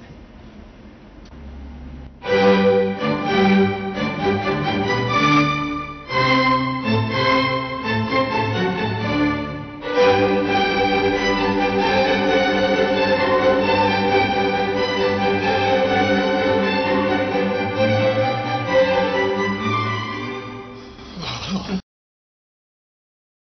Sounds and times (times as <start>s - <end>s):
Music: 2.2s - 21.8s.